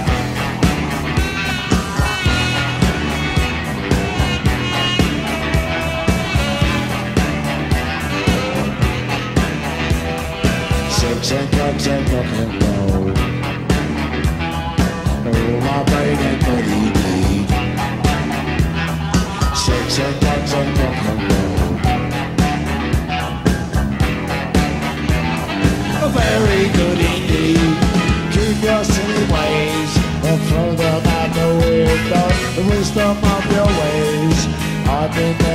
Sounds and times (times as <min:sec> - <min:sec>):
Rock and roll: 0:00.0 - 0:35.5.